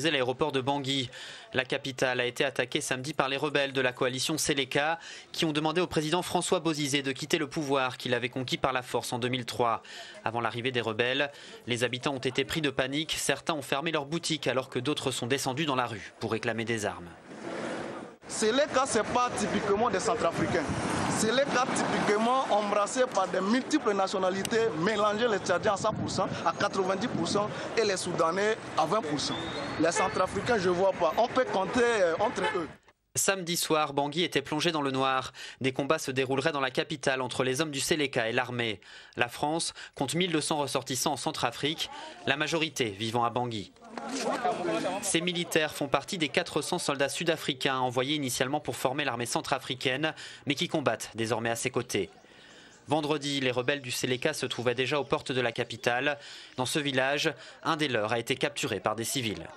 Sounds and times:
Speech: 0.0 - 17.2, 18.3 - 52.2, 52.9 - 59.5.

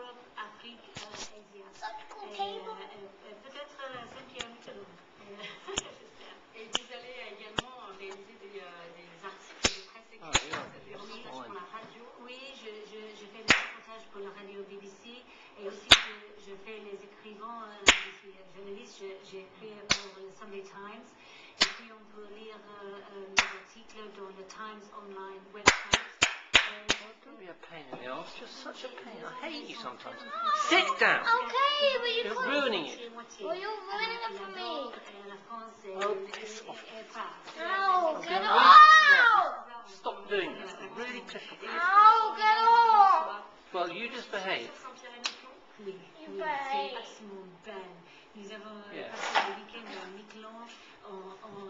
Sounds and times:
Television: 0.0 - 51.6
Child speech, kid speaking: 1.7 - 3.0, 29.0 - 35.2, 35.9 - 39.8, 41.6 - 43.5, 46.2 - 47.2.

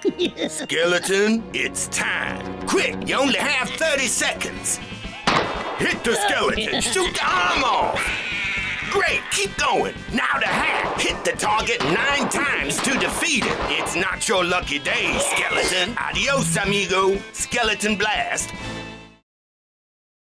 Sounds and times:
Music: 0.0 - 19.2
Speech: 0.7 - 4.8, 5.8 - 8.0, 8.9 - 18.5.

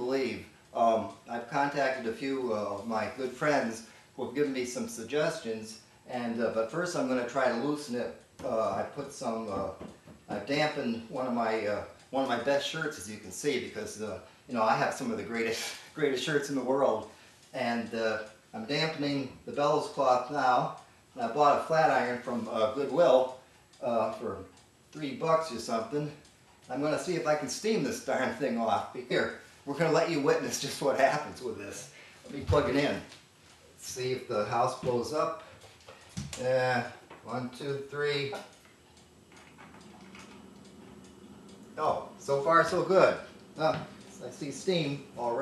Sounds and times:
Speech: 0.0 - 33.2, 33.8 - 35.4, 36.4 - 38.5, 41.8 - 45.4.

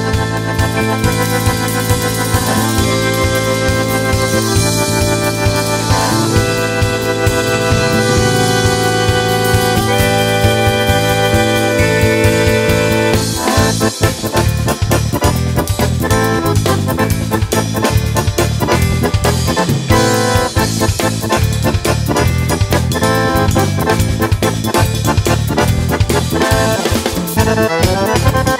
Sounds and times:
Music: 0.0 - 28.5.

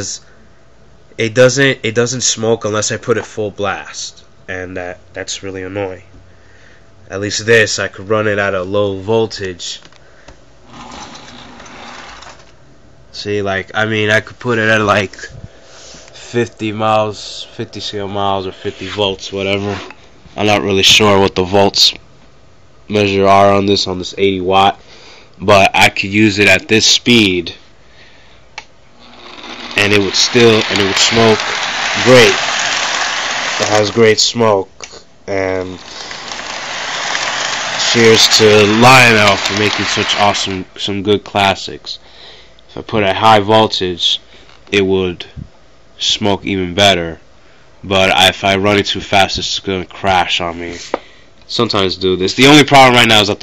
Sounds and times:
Speech: 0.0 - 0.3, 1.2 - 6.1, 7.1 - 9.9, 13.1 - 15.4, 16.2 - 22.0, 22.9 - 24.8, 25.4 - 27.6, 29.8 - 32.4, 33.6 - 35.8, 37.8 - 42.0, 42.7 - 47.2, 47.8 - 50.9, 51.5 - 53.4
Inside, small room: 0.0 - 53.4.

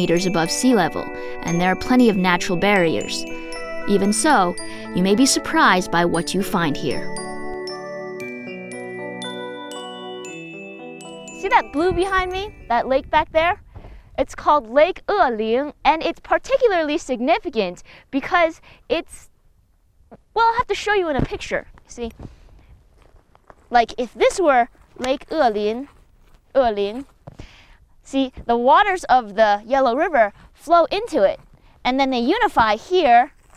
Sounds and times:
Speech: 0.0 - 3.3, 3.9 - 7.0, 11.4 - 13.6, 14.2 - 19.3, 20.4 - 22.2, 23.7 - 25.9, 26.6 - 27.0, 28.1 - 33.3
Outside, rural or natural: 0.0 - 7.8, 11.3 - 33.5
Music: 0.0 - 13.3.

